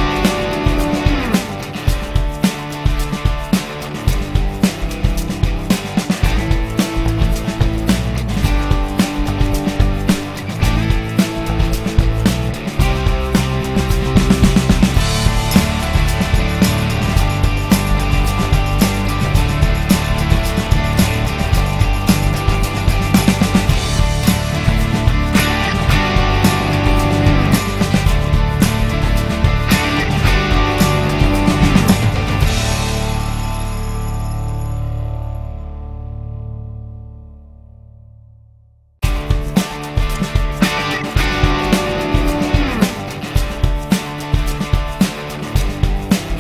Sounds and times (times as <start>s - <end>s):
Music: 0.0s - 46.4s.